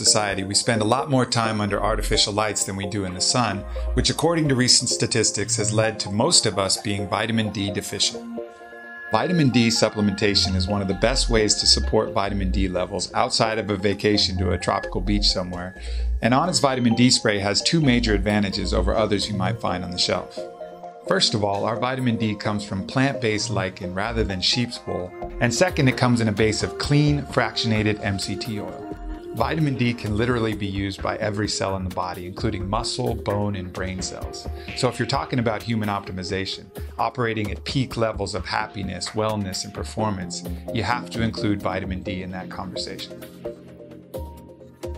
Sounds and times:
Speech: 0.0 - 8.2, 9.1 - 20.4, 21.1 - 43.1
Music: 0.0 - 44.9.

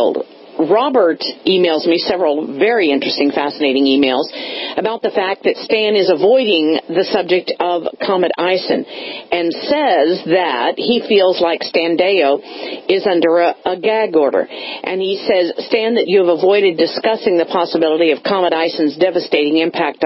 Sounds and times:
Speech: 0.0 - 20.0.

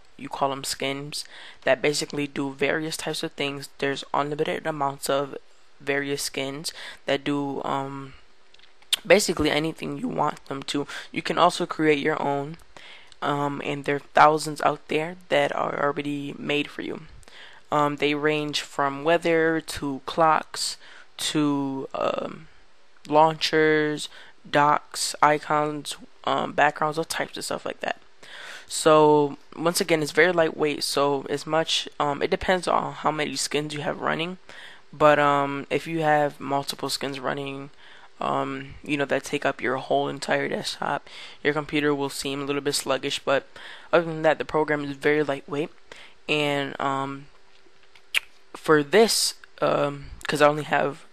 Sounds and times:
Speech: 0.2 - 8.2, 9.0 - 12.6, 13.2 - 17.1, 17.7 - 22.5, 23.1 - 28.0, 28.7 - 34.4, 35.0 - 45.7, 46.3 - 47.3, 48.6 - 51.1.

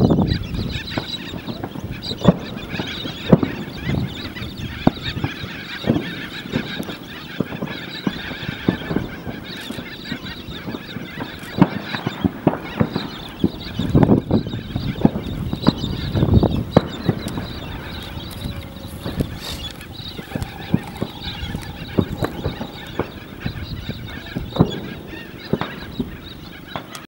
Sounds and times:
Animal: 0.0 - 27.0.

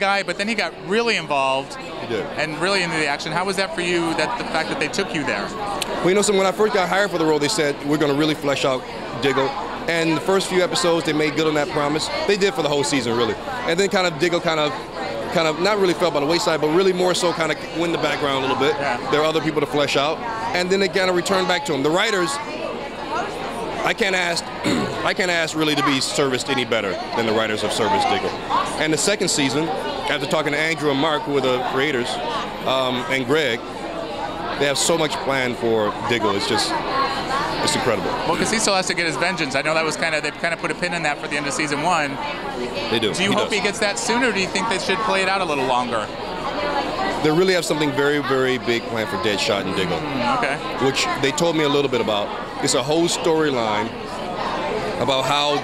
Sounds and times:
Speech: 34.3 - 46.1, 54.8 - 55.6.

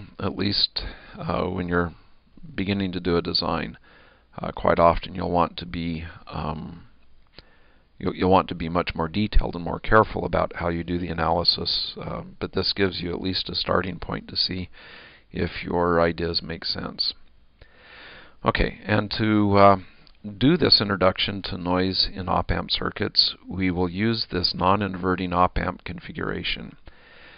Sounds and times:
Speech: 0.0 - 3.8, 4.4 - 6.9, 8.0 - 14.7, 15.3 - 17.2, 18.4 - 26.8.

